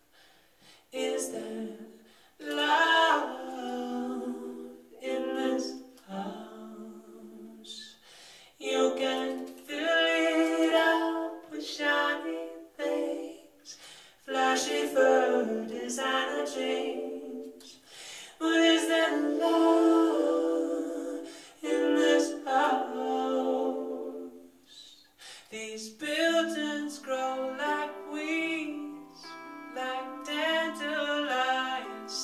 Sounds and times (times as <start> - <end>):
Music: 8.6 - 25.0, 26.0 - 32.2
Male singing: 18.4 - 19.6, 25.5 - 32.2.